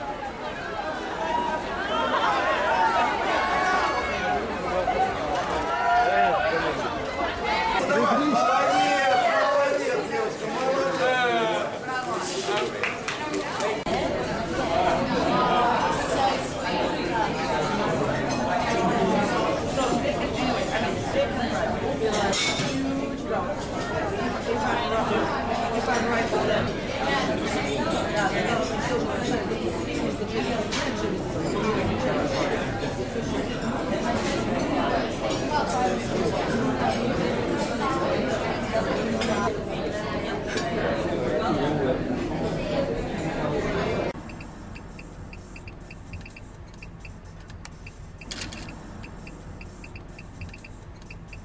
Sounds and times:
Speech: 0.0 - 44.2
Inside, public space: 0.0 - 51.4
Outside, urban or manmade: 0.0 - 51.4.

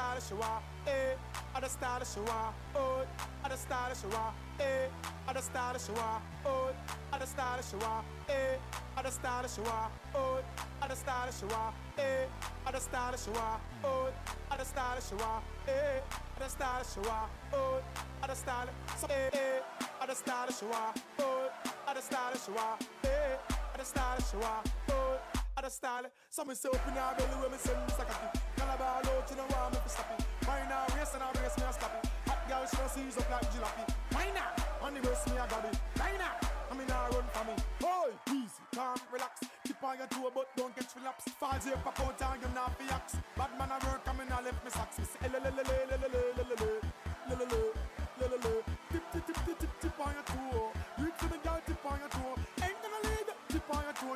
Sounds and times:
Music: 0.0 - 25.8, 26.6 - 54.1.

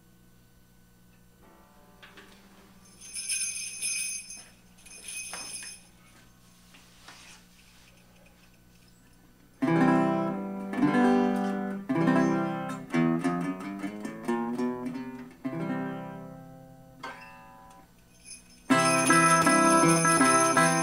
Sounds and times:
Guitar: 1.1 - 6.4, 7.1 - 20.8
Jingle (music): 2.8 - 5.9, 18.2 - 20.8
Jingle, tinkle: 2.8 - 6.0, 17.2 - 20.8.

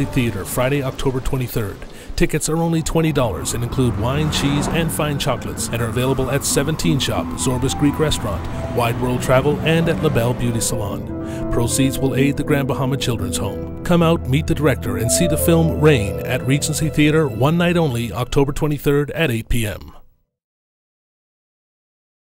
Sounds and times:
Music: 0.0 - 1.2, 2.8 - 20.0
Speech: 0.0 - 20.0.

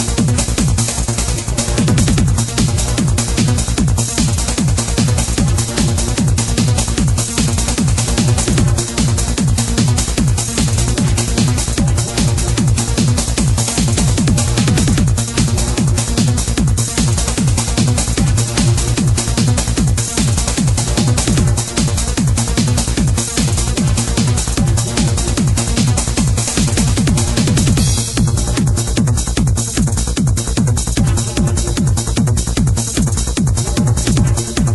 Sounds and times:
Trance music: 0.0 - 34.7.

